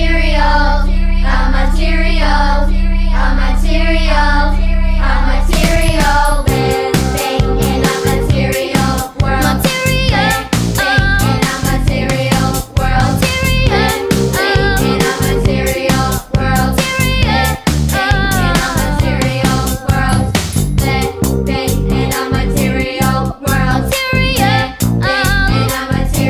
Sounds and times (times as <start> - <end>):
Singing: 0.0 - 26.2
Pop music: 5.5 - 26.2.